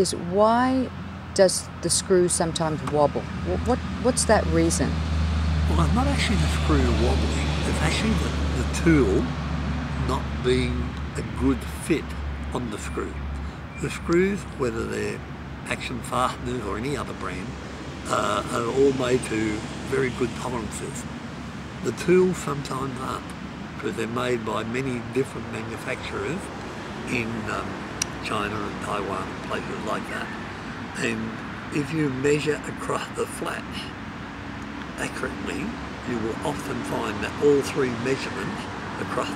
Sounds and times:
Speech: 0:00.0 - 0:05.0, 0:05.7 - 0:09.3, 0:10.0 - 0:13.2, 0:13.8 - 0:21.0, 0:21.8 - 0:30.4, 0:31.0 - 0:33.9, 0:35.0 - 0:39.3.

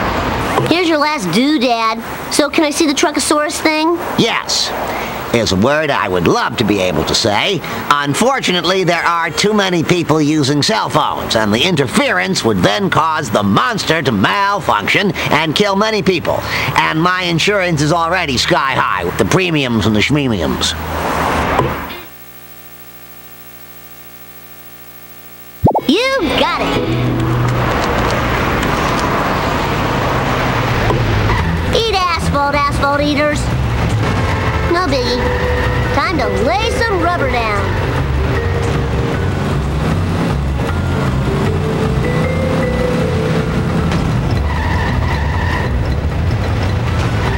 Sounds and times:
Speech: 0:00.6 - 0:20.8, 0:25.8 - 0:26.7, 0:34.7 - 0:35.2, 0:36.0 - 0:37.7
Music: 0:08.7 - 0:10.1, 0:26.2 - 0:27.8, 0:34.6 - 0:44.5.

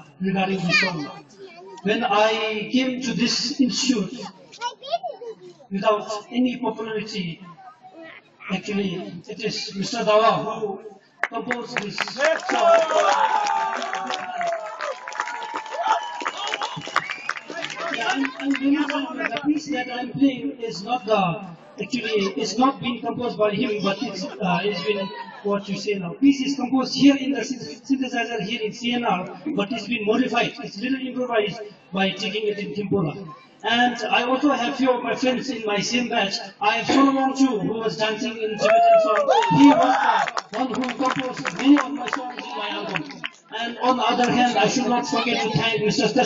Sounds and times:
Speech: 0:08.4 - 0:13.0, 0:17.6 - 0:46.2.

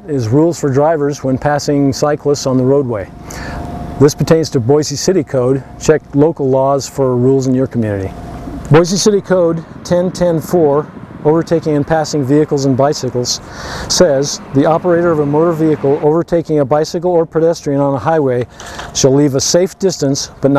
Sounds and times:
Speech: 0:00.0 - 0:03.2, 0:04.0 - 0:20.5
Vehicle: 0:00.0 - 0:20.5.

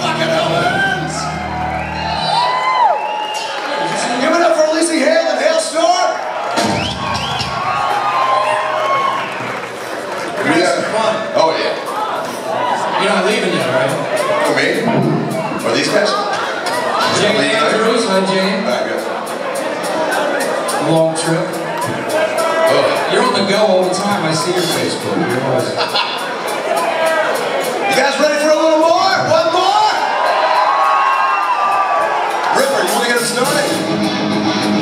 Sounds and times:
Music: 0:00.0 - 0:03.7, 0:13.5 - 0:34.8
Whoop: 0:01.2 - 0:04.0, 0:07.0 - 0:09.6, 0:30.0 - 0:32.3
Speech: 0:04.0 - 0:06.2, 0:17.0 - 0:19.1, 0:20.4 - 0:25.8, 0:27.1 - 0:30.0, 0:32.5 - 0:33.8.

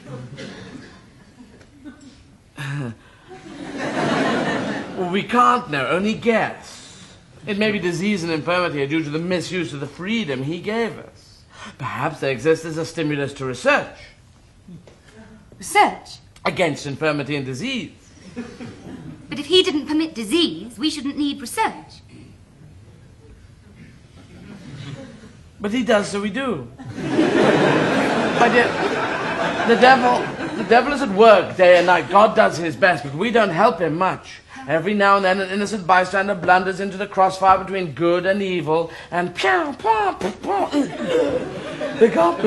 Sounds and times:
Conversation: 0:00.0 - 0:42.4.

